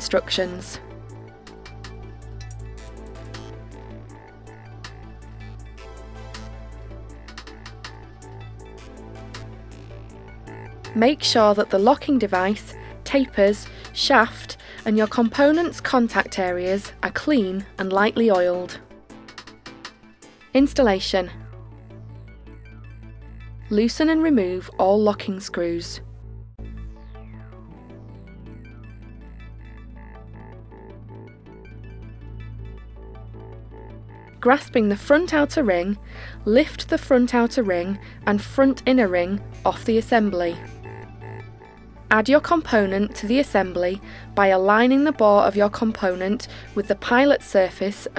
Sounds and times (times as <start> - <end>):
Speech: 0.0 - 0.8, 11.0 - 18.8, 20.6 - 21.4, 23.7 - 26.0, 34.4 - 40.7, 42.1 - 48.1
Music: 0.0 - 48.1.